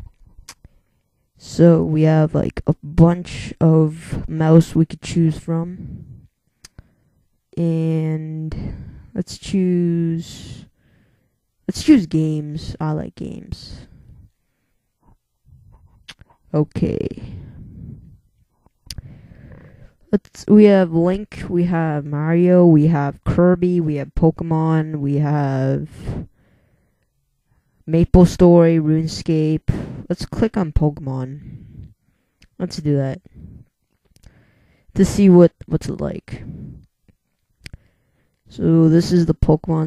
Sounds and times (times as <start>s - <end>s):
Speech: 1.4s - 6.2s, 7.6s - 10.7s, 11.7s - 14.0s, 16.1s - 17.6s, 20.1s - 26.3s, 27.9s - 31.6s, 32.6s - 33.3s, 35.0s - 36.7s, 38.5s - 39.8s.